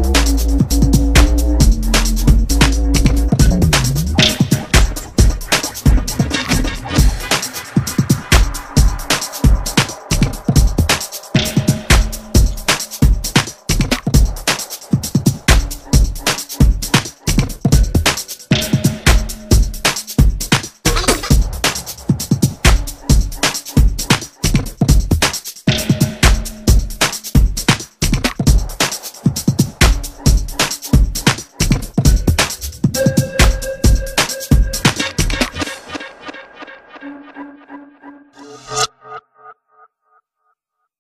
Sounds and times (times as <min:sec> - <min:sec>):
Electronica: 0:00.0 - 0:20.2, 0:20.9 - 0:24.2, 0:29.8 - 0:39.9.